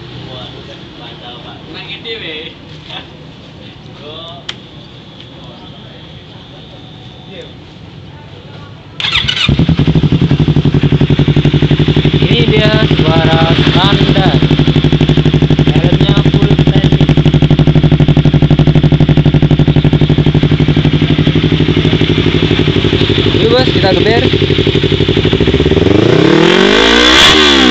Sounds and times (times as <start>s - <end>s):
Speech: 0.3s - 3.2s, 12.2s - 14.5s, 15.7s - 17.0s, 23.4s - 24.3s.